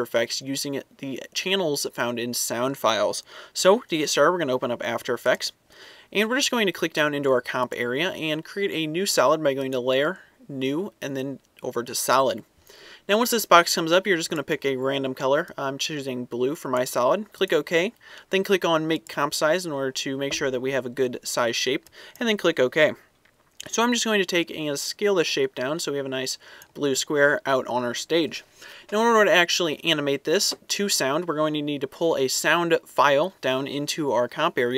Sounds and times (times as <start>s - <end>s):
Speech: 0.0s - 12.5s, 13.1s - 34.7s.